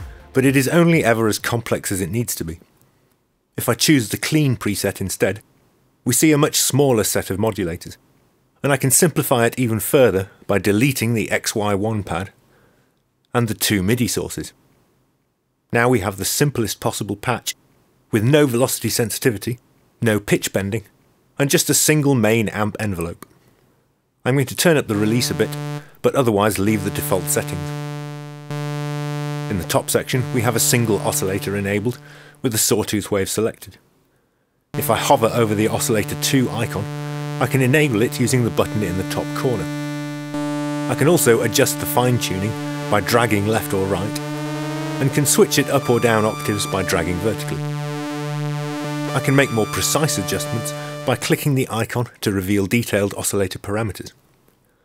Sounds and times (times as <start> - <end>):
Speech: 0.3 - 2.7, 3.6 - 5.4, 6.1 - 8.0, 8.6 - 12.4, 13.3 - 14.6, 15.7 - 23.2, 24.2 - 27.8, 29.4 - 33.8, 34.8 - 39.9, 40.7 - 47.6, 49.1 - 54.2.